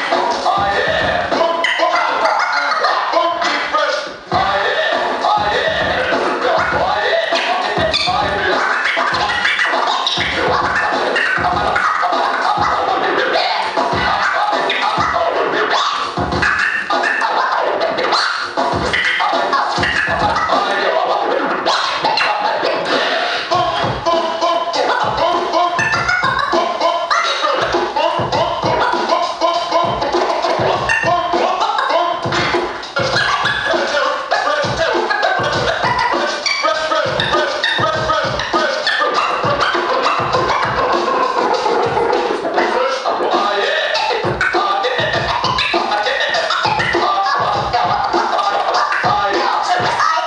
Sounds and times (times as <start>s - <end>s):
Electronic music: 0.0s - 50.2s
Scratching (performance technique): 0.0s - 50.2s.